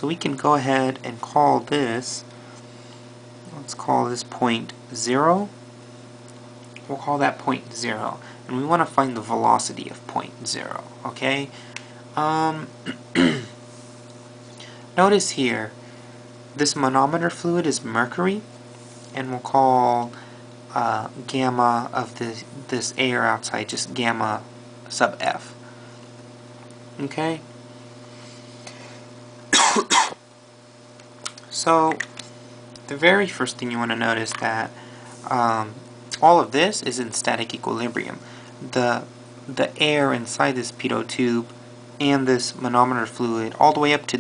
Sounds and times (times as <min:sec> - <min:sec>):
Speech: 0:00.0 - 0:02.3, 0:03.5 - 0:05.6, 0:06.8 - 0:11.6, 0:12.2 - 0:12.7, 0:15.0 - 0:15.8, 0:16.6 - 0:18.5, 0:19.2 - 0:25.6, 0:27.0 - 0:27.5, 0:31.3 - 0:32.0, 0:32.9 - 0:44.2.